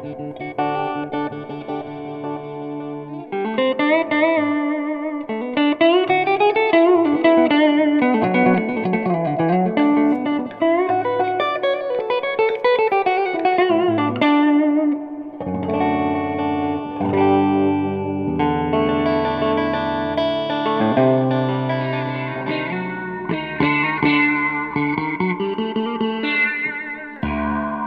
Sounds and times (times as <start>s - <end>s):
Music: 0.0s - 27.8s.